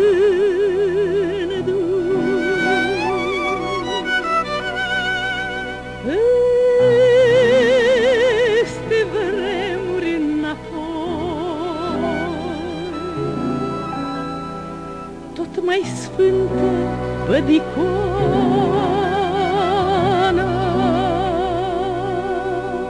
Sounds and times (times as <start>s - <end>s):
Music: 0.0s - 22.9s.